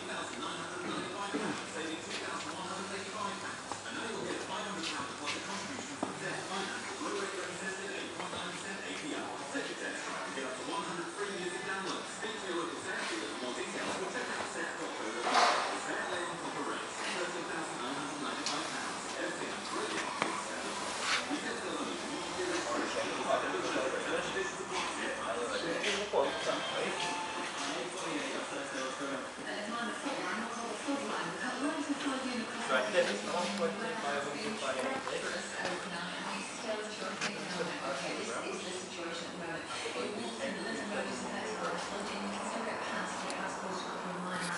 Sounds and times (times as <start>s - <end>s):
Speech: 0.0s - 44.5s.